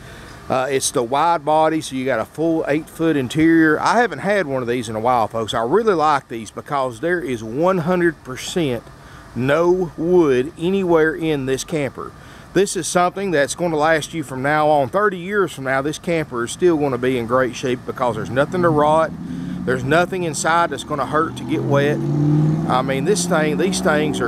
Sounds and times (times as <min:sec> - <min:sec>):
Speech: 0:00.5 - 0:08.8, 0:09.4 - 0:22.0, 0:22.7 - 0:24.2.